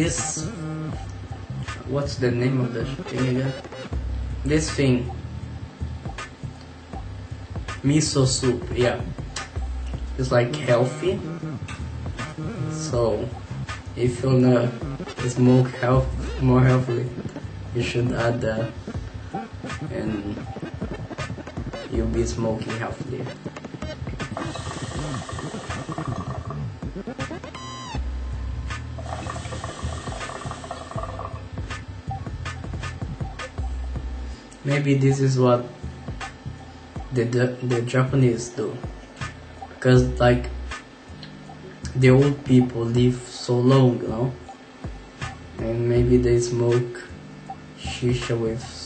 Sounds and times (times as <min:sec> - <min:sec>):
Inside, small room: 0:00.0 - 0:48.8
Music: 0:00.0 - 0:48.8.